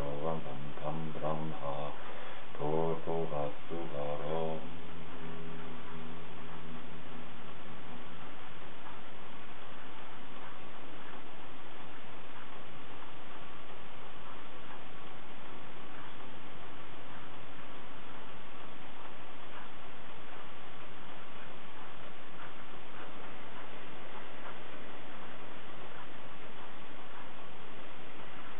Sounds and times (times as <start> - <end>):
Speech: 0.0 - 6.3
Mantra: 0.0 - 7.3.